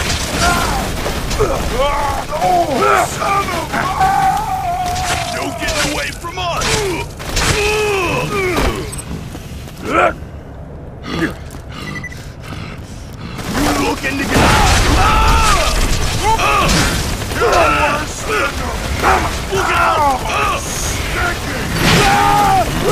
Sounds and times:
Speech: 5.2s - 8.8s, 13.5s - 16.7s, 19.5s - 22.9s.

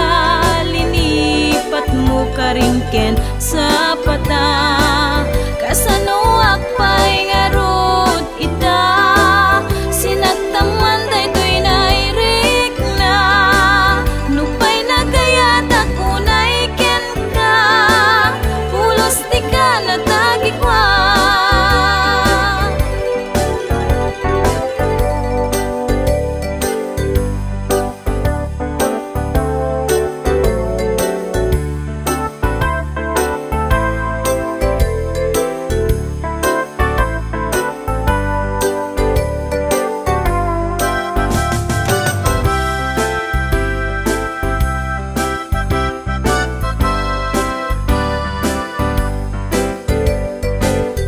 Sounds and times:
Music: 0.0s - 51.0s.

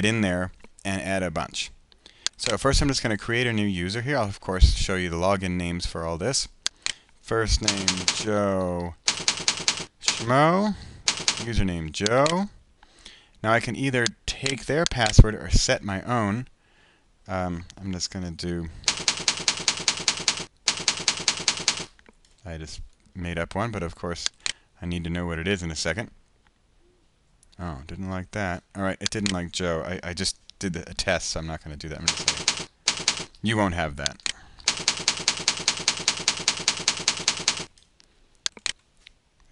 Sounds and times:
Computer keyboard: 7.6s - 8.3s, 9.1s - 10.3s, 11.1s - 12.4s, 18.9s - 22.0s, 32.1s - 33.4s, 34.2s - 37.9s.

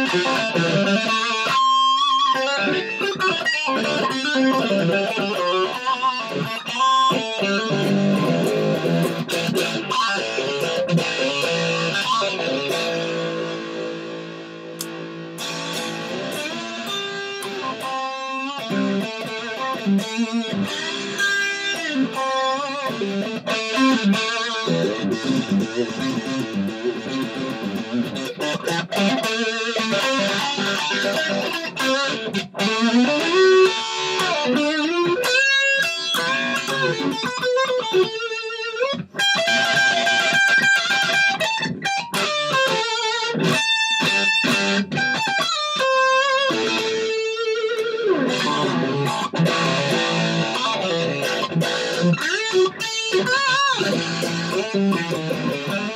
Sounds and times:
Electric guitar: 0.0s - 55.9s.

